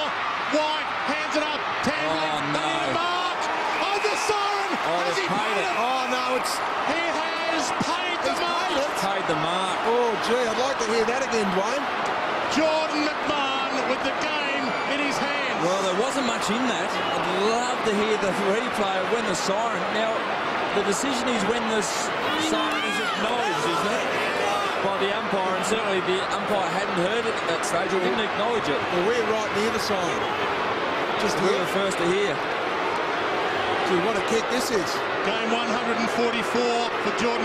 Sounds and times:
Speech: 0:00.0 - 0:11.9, 0:12.5 - 0:20.2, 0:20.8 - 0:24.2, 0:24.8 - 0:30.2, 0:31.2 - 0:32.4, 0:33.9 - 0:37.4.

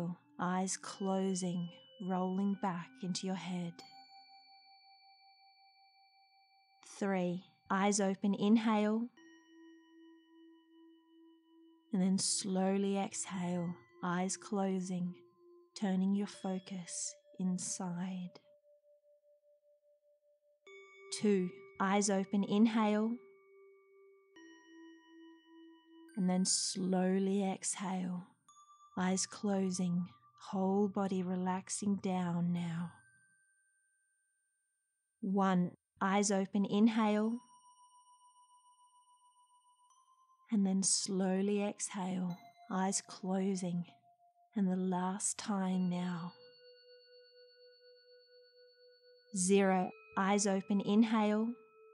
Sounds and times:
Speech: 0:00.0 - 0:03.8, 0:06.9 - 0:09.1, 0:12.0 - 0:15.1, 0:15.8 - 0:18.4, 0:21.1 - 0:23.2, 0:26.2 - 0:28.2, 0:29.0 - 0:33.0, 0:35.2 - 0:37.4, 0:40.5 - 0:43.9, 0:44.6 - 0:46.4, 0:49.4 - 0:51.6
Music: 0:00.0 - 0:34.6, 0:35.3 - 0:51.9.

